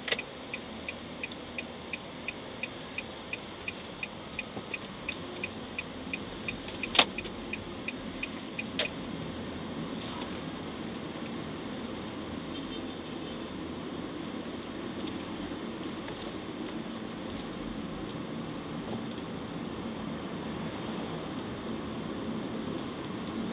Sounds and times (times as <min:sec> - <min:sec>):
Vehicle: 0:00.0 - 0:23.5.